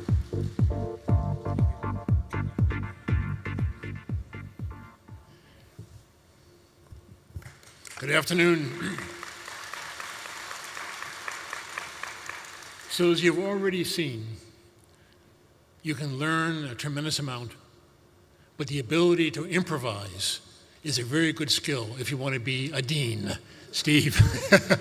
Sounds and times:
Narration, monologue: 7.8s - 9.3s, 12.8s - 24.8s
Male speech, man speaking: 8.0s - 9.1s, 12.9s - 14.5s, 15.8s - 17.6s, 18.6s - 24.4s.

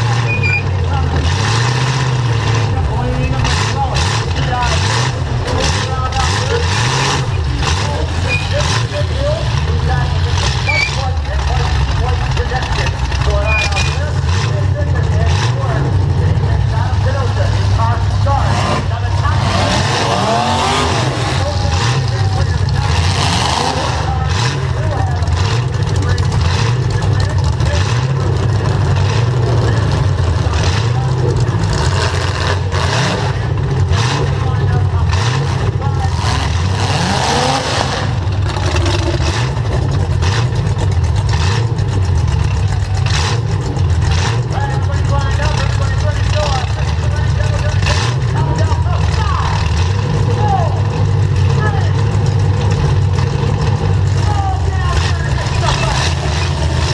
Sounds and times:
Speech: 0.0s - 1.3s, 2.6s - 28.8s, 29.4s - 31.8s, 34.0s - 36.5s, 44.5s - 52.2s, 54.1s - 56.9s.

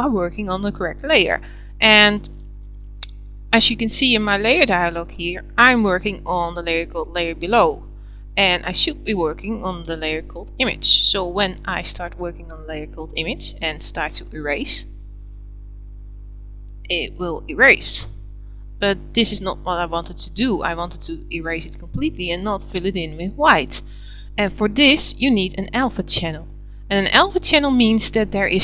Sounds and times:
Speech: 0.0s - 2.3s, 3.6s - 14.9s, 16.9s - 18.1s, 18.8s - 28.6s.

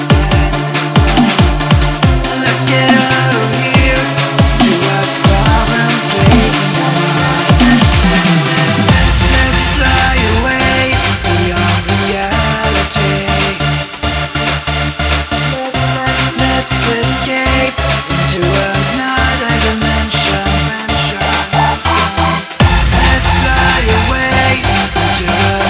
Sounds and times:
Dubstep: 0.0s - 25.6s.

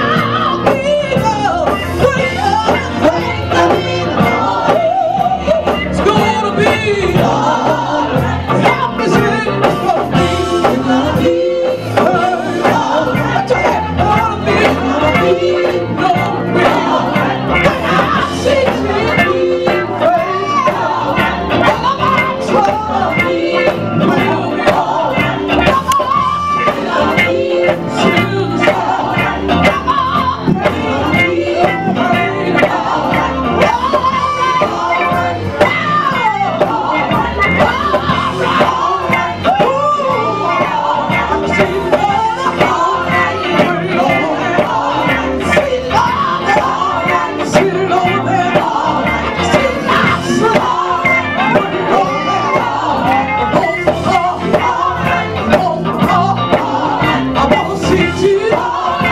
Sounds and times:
Female singing: 0.0s - 59.1s
Music: 0.0s - 59.1s.

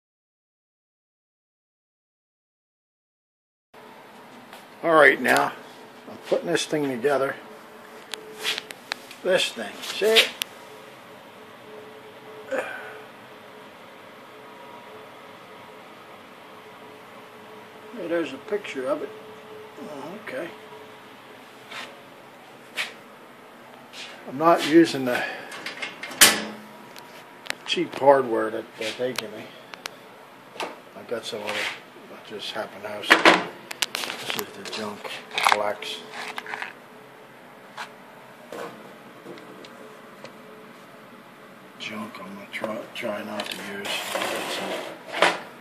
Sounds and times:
Speech: 4.8s - 7.4s, 9.2s - 10.4s, 17.9s - 19.1s, 19.8s - 20.6s, 24.3s - 25.3s, 27.7s - 29.5s, 31.0s - 33.2s, 34.3s - 36.1s, 41.8s - 44.6s.

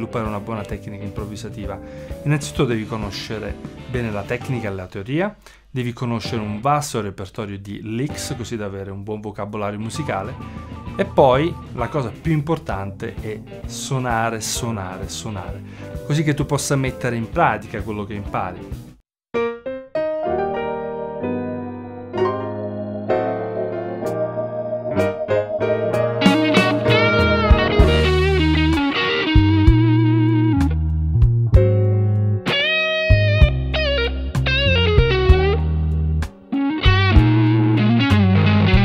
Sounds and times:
Electric guitar: 22.1s - 38.8s.

